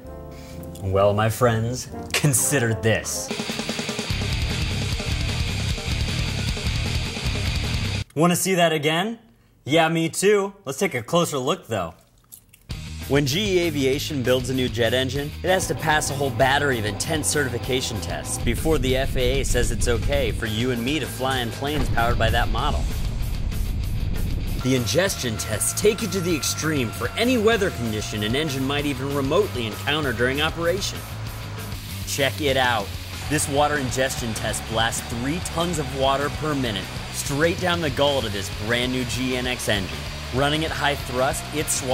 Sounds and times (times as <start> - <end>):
Music: 0.0 - 8.1, 12.7 - 41.9
Speech: 0.8 - 3.3, 8.1 - 12.0, 13.1 - 22.9, 24.6 - 31.0, 32.1 - 41.9.